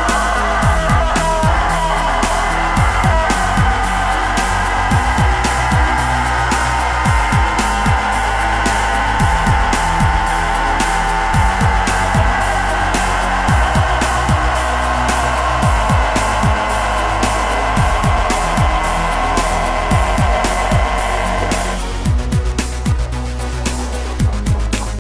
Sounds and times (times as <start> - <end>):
Music: 0.0 - 25.0.